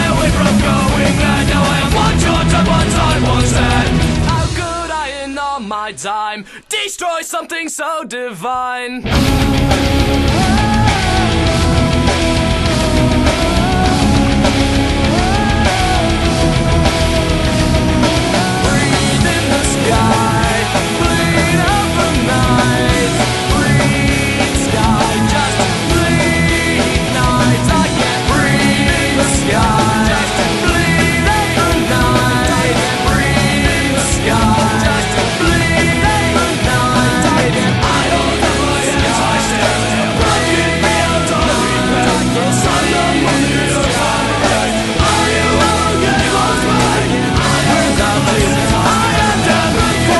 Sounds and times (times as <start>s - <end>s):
Music: 0.0s - 6.6s, 9.0s - 50.1s.